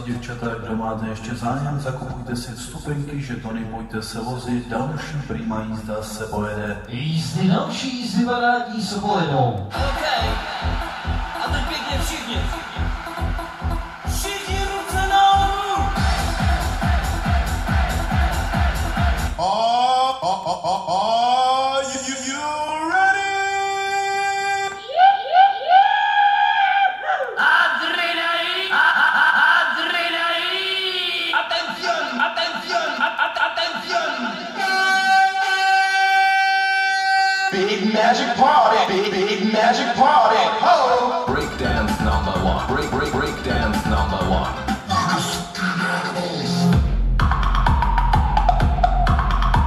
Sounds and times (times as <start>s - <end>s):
Music: 9.7s - 19.4s, 41.2s - 49.6s.